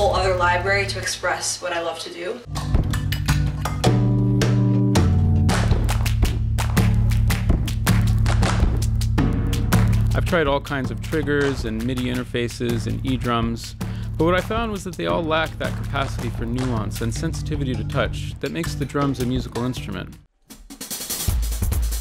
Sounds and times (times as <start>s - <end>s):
Speech: 0.0s - 2.5s, 10.2s - 20.2s
Percussion: 2.5s - 22.0s.